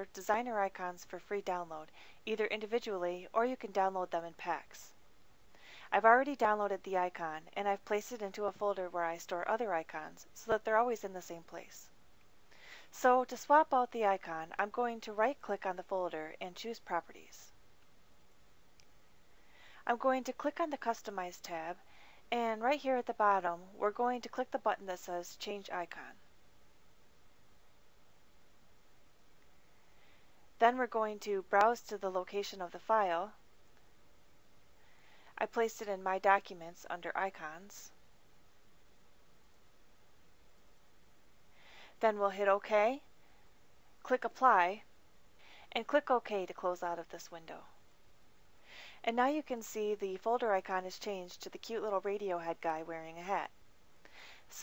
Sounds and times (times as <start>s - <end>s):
Speech: 0.0s - 5.0s, 5.9s - 11.9s, 12.9s - 17.6s, 19.8s - 26.2s, 30.6s - 33.4s, 35.4s - 38.0s, 42.0s - 43.1s, 44.0s - 44.9s, 45.7s - 47.8s, 49.0s - 53.5s.